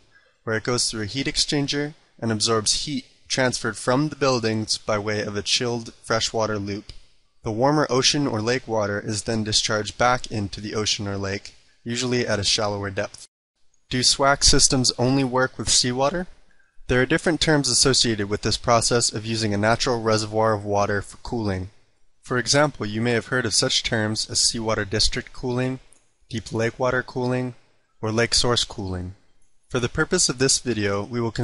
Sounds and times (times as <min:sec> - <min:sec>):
Speech: 0:00.0 - 0:13.3, 0:13.9 - 0:31.4.